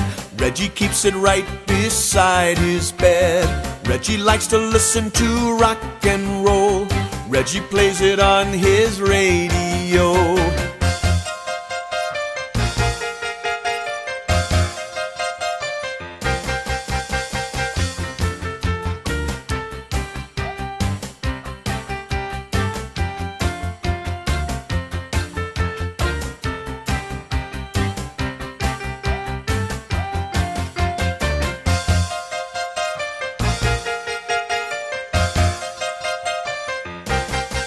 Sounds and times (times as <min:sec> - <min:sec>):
Music: 0:00.0 - 0:37.6.